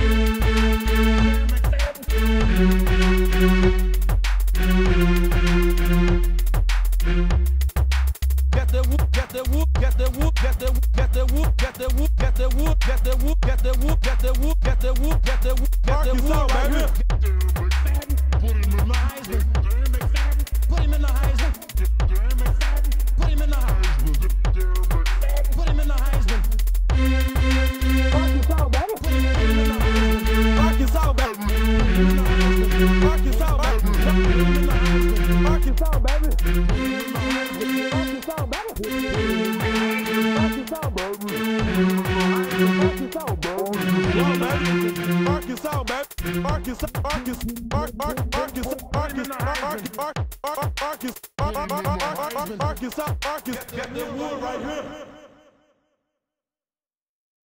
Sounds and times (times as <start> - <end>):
Music: 0.0 - 55.1.